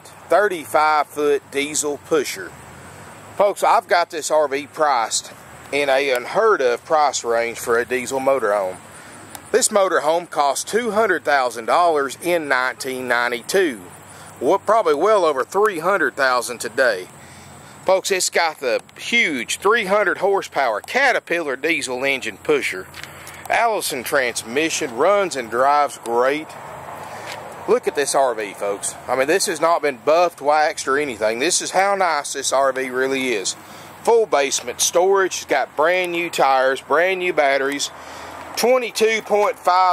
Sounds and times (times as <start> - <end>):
Speech: 0.0 - 2.5, 3.4 - 8.8, 9.5 - 17.1, 17.9 - 22.9, 23.5 - 26.6, 27.7 - 38.0, 38.6 - 39.9.